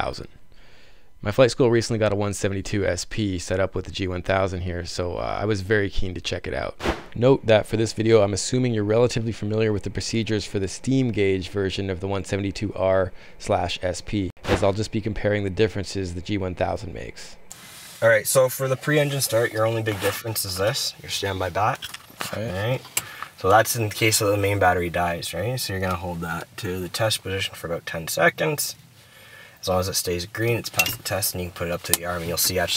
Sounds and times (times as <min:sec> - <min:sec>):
Speech: 0:00.0 - 0:00.3, 0:01.2 - 0:17.4, 0:18.0 - 0:28.8, 0:29.6 - 0:32.7.